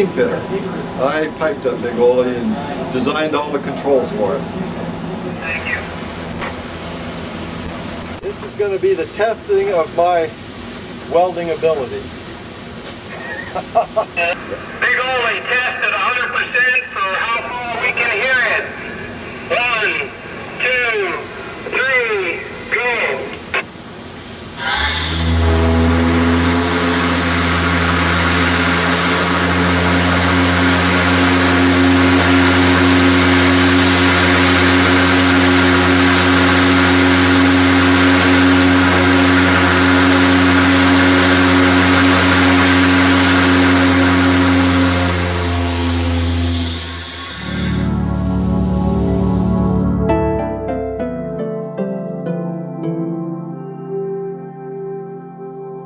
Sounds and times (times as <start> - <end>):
Hiss: 24.6 - 25.2.